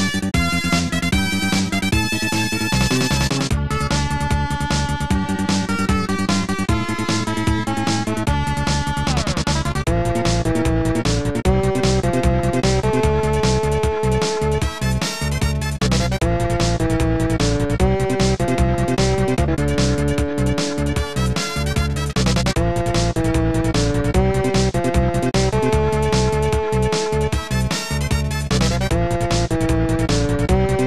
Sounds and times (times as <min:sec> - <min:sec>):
Blues: 0:00.0 - 0:30.8
Rhythm and blues: 0:00.0 - 0:30.8
Soundtrack music: 0:00.0 - 0:30.8.